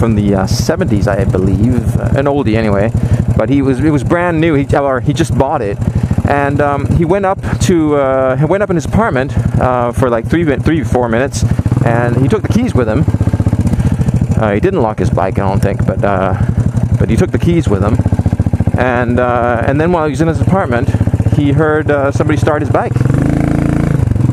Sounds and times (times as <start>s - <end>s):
Speech: 0.0s - 13.1s, 14.4s - 16.4s, 17.0s - 18.0s, 18.8s - 22.9s
Motorcycle: 0.0s - 24.3s.